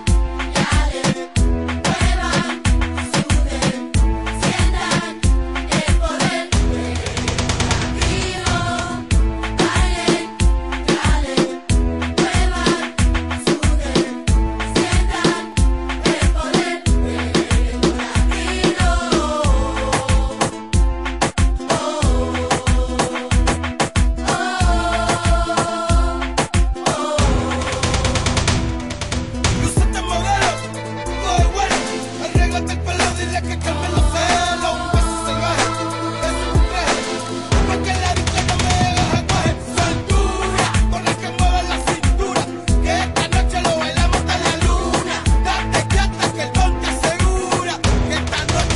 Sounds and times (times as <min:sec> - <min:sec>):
Music: 0:00.0 - 0:48.7.